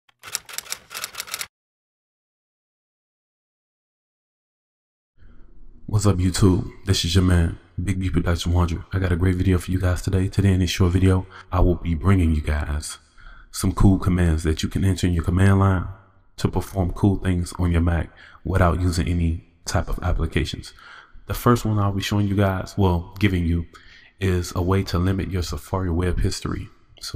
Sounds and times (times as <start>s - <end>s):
Speech: 5.9s - 27.1s.